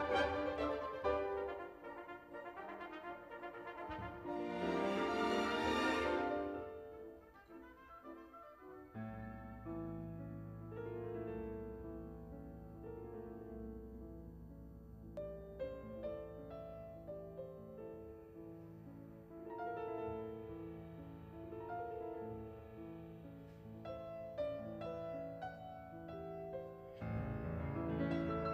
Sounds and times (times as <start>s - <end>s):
Classical music: 0.0s - 28.5s
Orchestra: 0.0s - 28.5s
Piano: 0.0s - 28.5s.